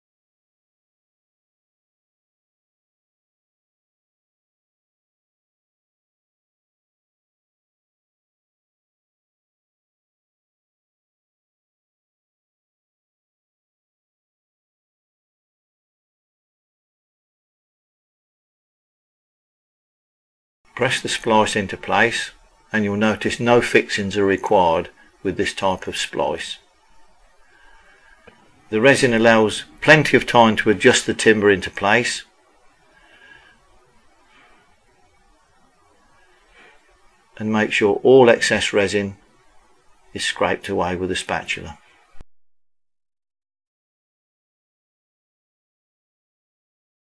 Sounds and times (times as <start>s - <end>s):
Speech: 20.8s - 26.6s, 28.7s - 32.3s, 37.4s - 39.2s, 40.2s - 41.8s.